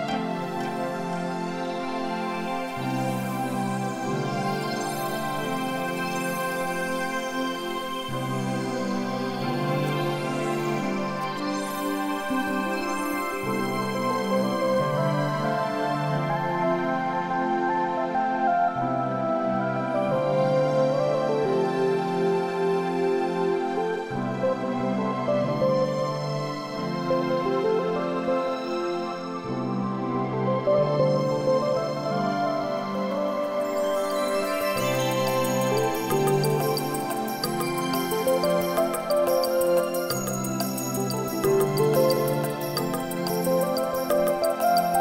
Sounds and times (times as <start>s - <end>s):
New-age music: 0.0s - 45.0s.